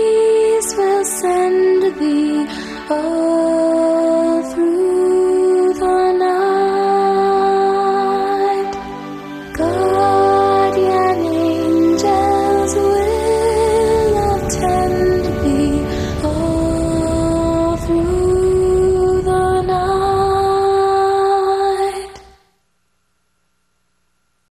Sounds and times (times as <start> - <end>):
Lullaby: 0.0 - 22.5.